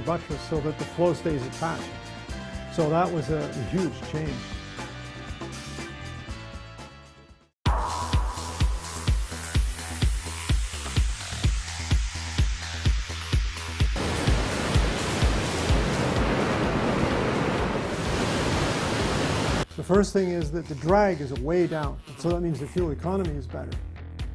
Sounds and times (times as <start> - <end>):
Speech: 0.0 - 1.9, 2.7 - 4.4, 19.8 - 23.8
Music: 0.0 - 17.6, 19.6 - 24.3.